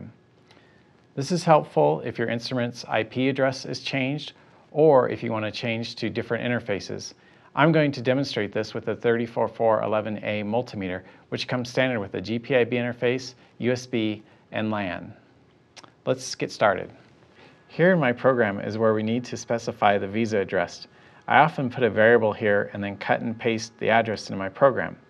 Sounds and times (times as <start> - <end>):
Speech: 0.0 - 0.2, 1.2 - 17.1, 17.7 - 25.0.